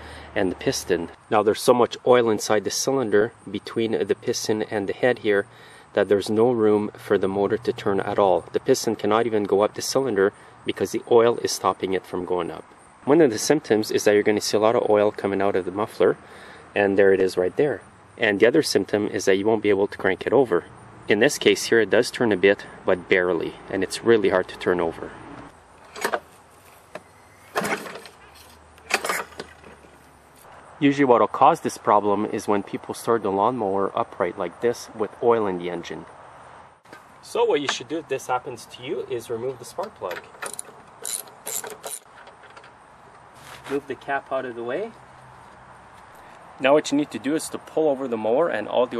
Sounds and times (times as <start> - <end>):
Speech: 0.4 - 16.2, 16.8 - 25.2, 30.8 - 36.1, 37.2 - 40.2, 43.7 - 45.0, 46.6 - 48.9.